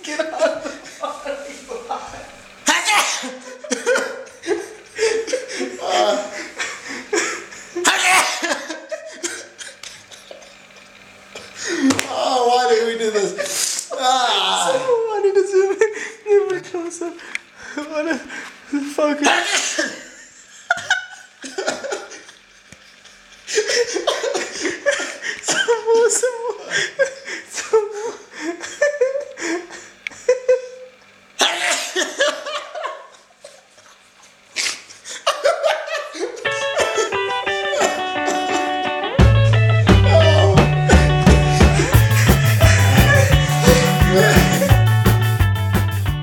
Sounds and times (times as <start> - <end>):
Speech: 0.0 - 3.4, 5.7 - 6.4, 12.0 - 17.2, 17.8 - 20.0, 25.7 - 26.8
Sneeze: 2.7 - 3.4, 19.3 - 19.9, 31.4 - 32.0, 34.6 - 34.9.